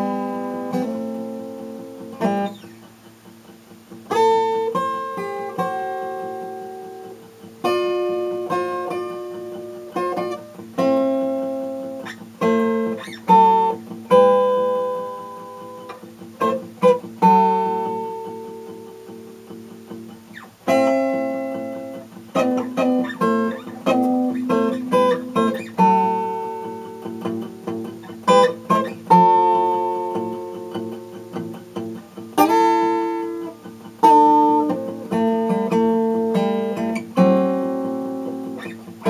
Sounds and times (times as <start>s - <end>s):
Acoustic guitar: 0.0s - 39.1s
Strum: 3.9s - 39.1s.